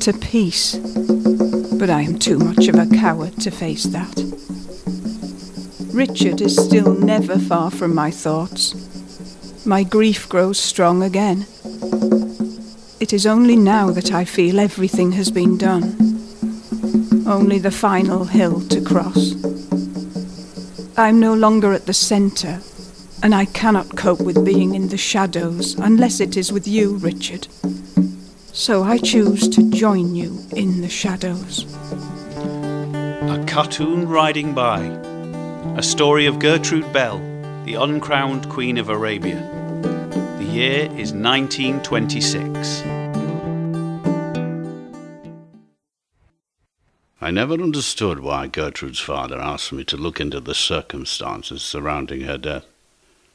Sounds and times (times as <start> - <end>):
Speech: 0.0 - 0.8, 1.8 - 4.2, 6.0 - 8.8, 9.7 - 11.5, 13.0 - 15.9, 17.3 - 19.4, 21.0 - 22.6, 23.2 - 27.5, 28.6 - 31.6, 33.3 - 35.0, 35.8 - 39.4, 40.4 - 42.9, 47.2 - 52.7
Music: 0.0 - 45.8.